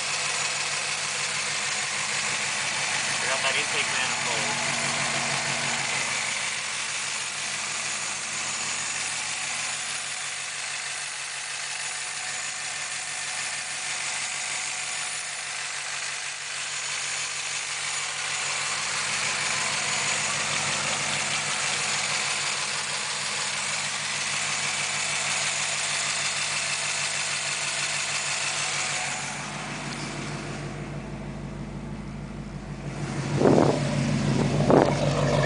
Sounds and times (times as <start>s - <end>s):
Engine: 0.0s - 35.4s.